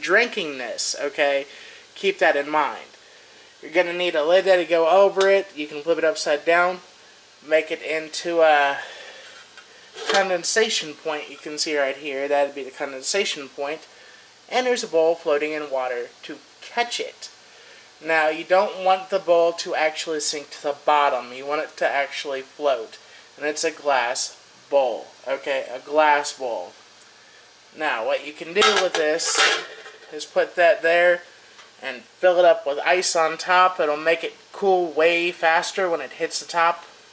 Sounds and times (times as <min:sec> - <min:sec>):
Speech: 0:00.0 - 0:03.0, 0:03.6 - 0:09.0, 0:10.0 - 0:13.9, 0:14.5 - 0:17.4, 0:18.0 - 0:26.8, 0:27.8 - 0:36.9.